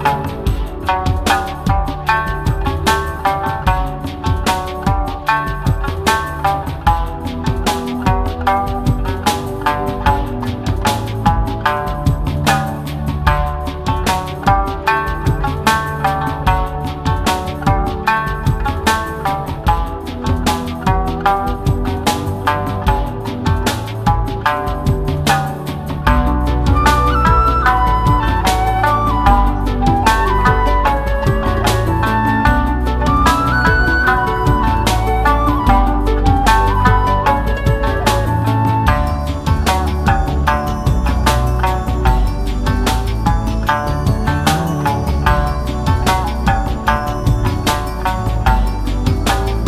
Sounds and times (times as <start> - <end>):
Music: 0.0 - 49.6.